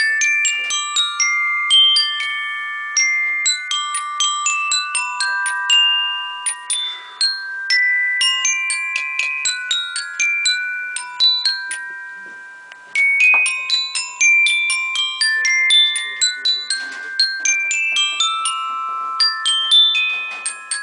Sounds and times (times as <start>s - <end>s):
Marimba, xylophone: 0.0s - 20.8s.